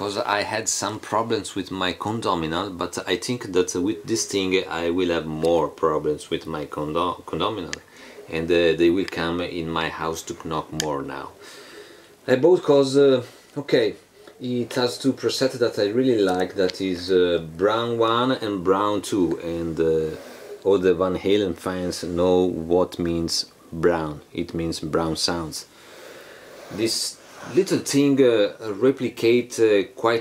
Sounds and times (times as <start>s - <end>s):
Speech: 0.0s - 11.4s, 12.3s - 25.7s, 26.7s - 30.2s.